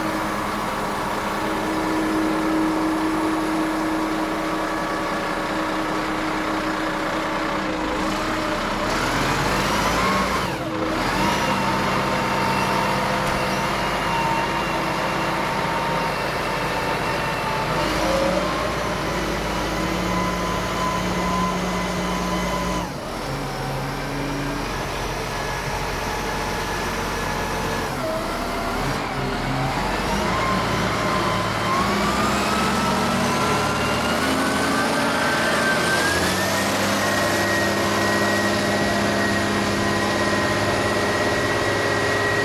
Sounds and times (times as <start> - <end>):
Truck: 0.0 - 42.4.